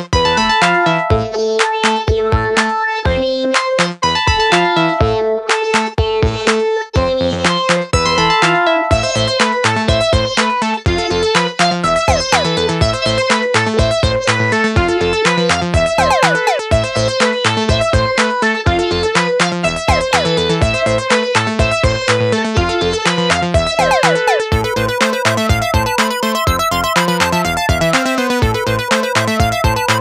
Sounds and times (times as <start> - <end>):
Electronica: 12.1 - 12.7, 16.0 - 16.8, 19.8 - 20.6, 23.8 - 28.9
Techno: 12.1 - 12.7, 16.0 - 16.9, 19.8 - 21.0, 23.7 - 30.0.